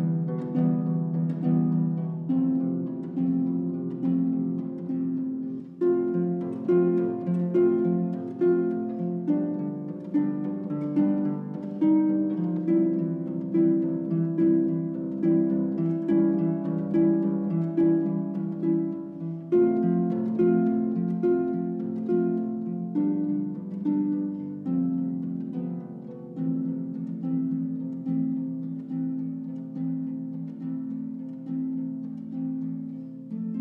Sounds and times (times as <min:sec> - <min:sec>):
Music: 0:00.0 - 0:33.6.